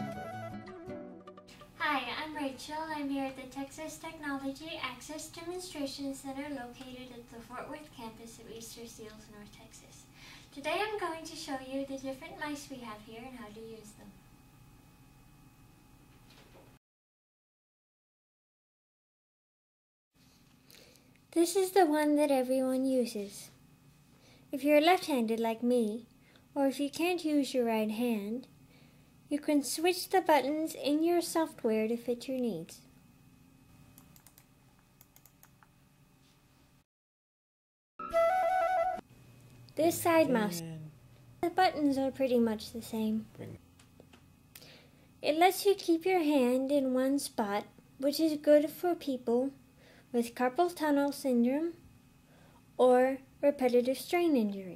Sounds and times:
Speech: 1.8s - 14.2s, 21.3s - 23.6s, 24.5s - 28.5s, 29.3s - 32.9s, 39.8s - 43.6s, 45.2s - 49.6s, 50.2s - 51.8s, 52.8s - 54.7s.

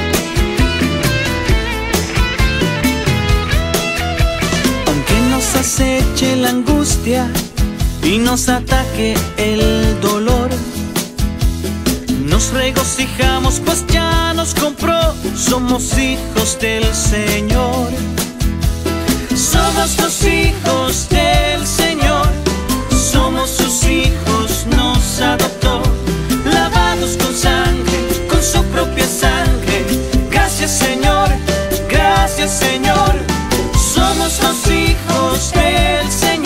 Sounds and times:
Music: 0.0s - 36.4s.

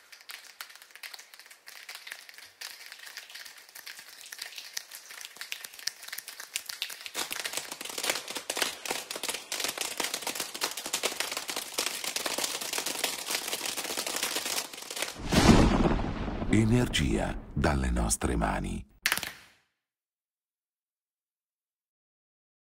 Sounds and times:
Speech: 16.5s - 18.9s.

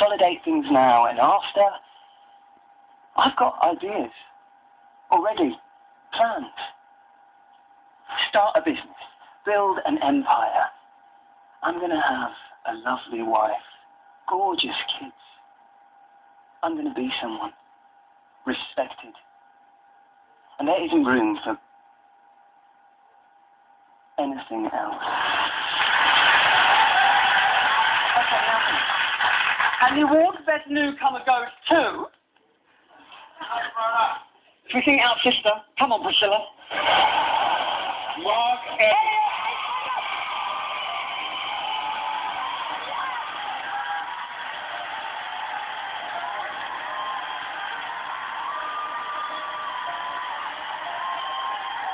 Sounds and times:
Male speech, man speaking: 0.0s - 1.8s, 3.2s - 4.4s, 5.1s - 6.8s, 11.6s - 15.4s, 16.6s - 17.6s, 18.4s - 19.2s, 20.6s - 21.6s, 24.2s - 25.0s, 38.2s - 39.0s.

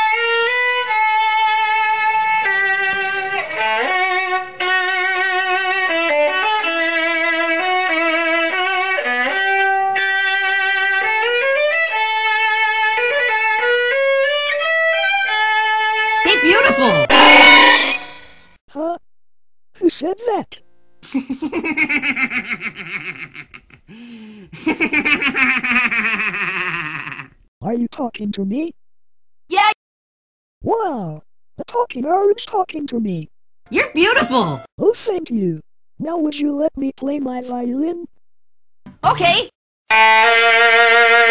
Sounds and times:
Speech: 18.7s - 19.0s, 19.8s - 20.6s, 27.6s - 28.7s, 30.7s - 38.1s, 39.0s - 39.5s.

